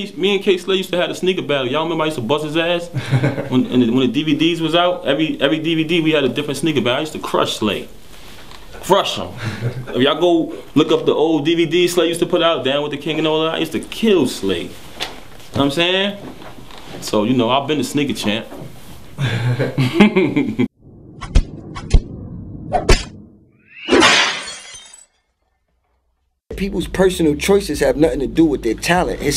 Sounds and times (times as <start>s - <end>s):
Speech: 0.0s - 2.9s, 3.5s - 7.9s, 8.8s - 14.8s, 15.5s - 16.3s, 17.0s - 18.5s, 26.5s - 29.3s
Inside, small room: 0.0s - 21.5s
Shatter: 23.7s - 25.3s.